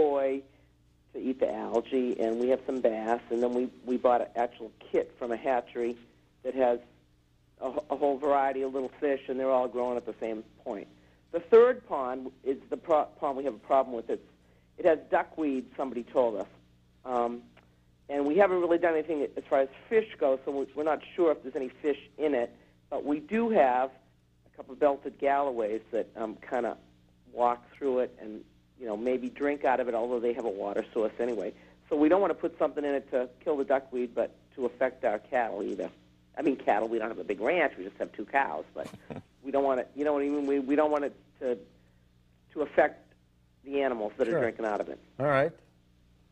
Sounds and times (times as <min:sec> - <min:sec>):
Speech: 0:00.0 - 0:00.4, 0:01.2 - 0:06.8, 0:07.6 - 0:14.2, 0:14.8 - 0:16.5, 0:17.1 - 0:17.5, 0:18.1 - 0:24.0, 0:24.6 - 0:41.6, 0:42.6 - 0:43.0, 0:43.7 - 0:45.6.